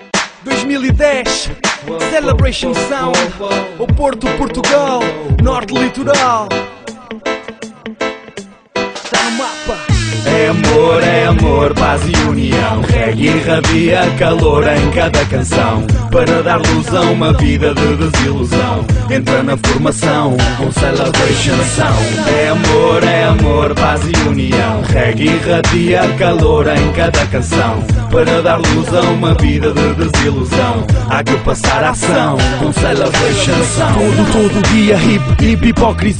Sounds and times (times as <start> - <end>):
Music: 0.0 - 36.1.